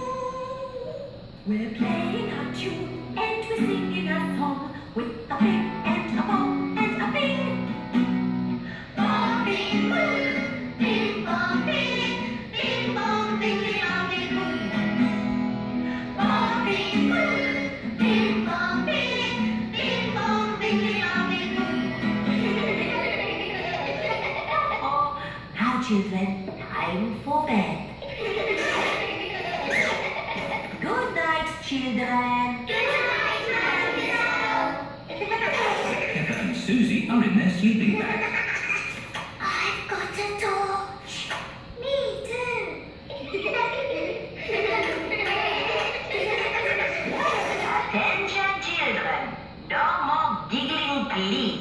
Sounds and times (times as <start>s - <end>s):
Music: 1.8s - 23.9s.